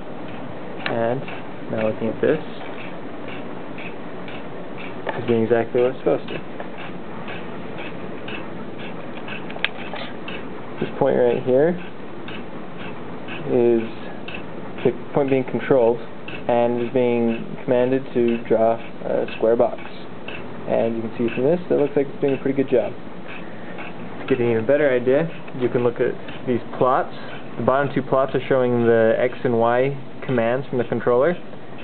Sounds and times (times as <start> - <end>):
Speech: 0.8 - 2.7, 5.1 - 6.4, 10.8 - 11.9, 13.4 - 14.2, 14.8 - 20.1, 20.7 - 23.0, 24.3 - 31.4.